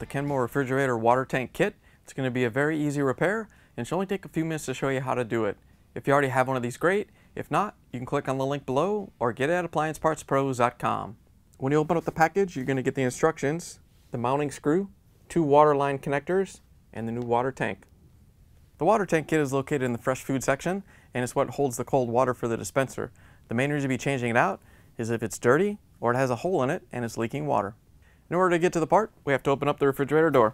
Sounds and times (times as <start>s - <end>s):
Speech: 0.0s - 17.9s, 18.8s - 30.5s.